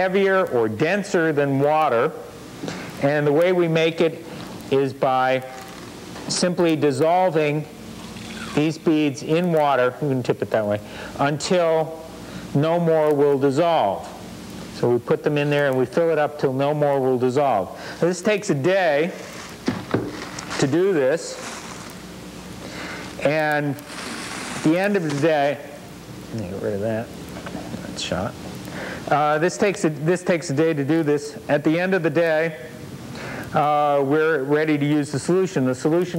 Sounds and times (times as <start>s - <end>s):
Speech: 0.0s - 2.2s, 3.0s - 5.6s, 6.3s - 7.7s, 8.6s - 14.2s, 14.8s - 19.2s, 20.6s - 21.4s, 23.2s - 23.8s, 24.6s - 27.1s, 27.8s - 28.4s, 29.1s - 32.7s, 33.6s - 36.1s.